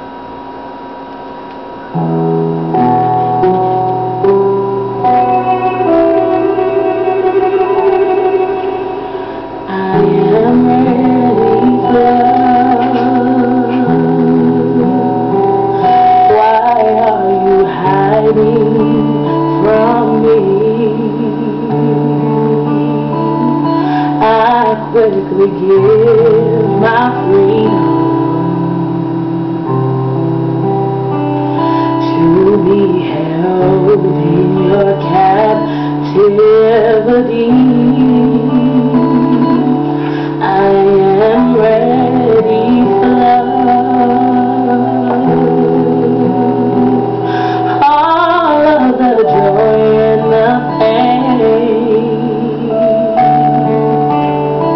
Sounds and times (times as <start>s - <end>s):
Music: 0.0s - 54.7s
Female singing: 9.7s - 15.3s, 15.9s - 28.9s, 32.0s - 53.8s.